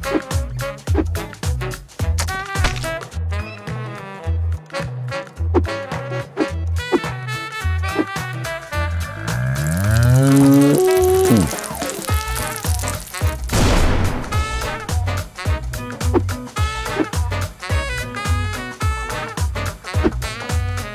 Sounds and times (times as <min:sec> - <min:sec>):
Music: 0:00.0 - 0:20.9.